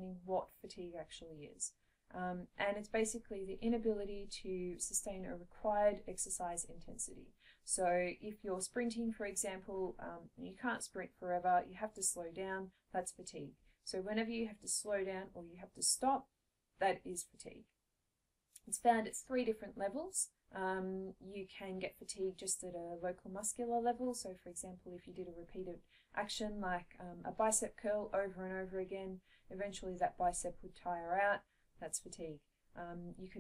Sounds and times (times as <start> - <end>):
Speech: 0.0 - 16.2, 16.8 - 17.7, 18.6 - 33.4.